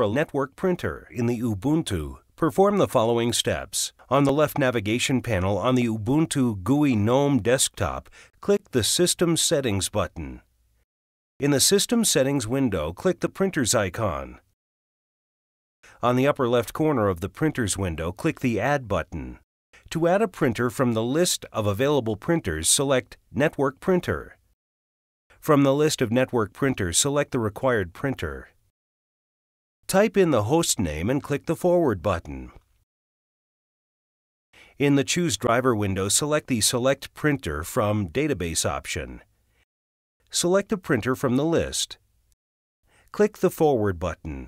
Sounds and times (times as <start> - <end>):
Speech: 0.0 - 10.5, 11.4 - 14.5, 16.0 - 24.4, 25.4 - 28.6, 29.9 - 32.6, 34.7 - 39.3, 40.3 - 42.0, 43.1 - 44.4.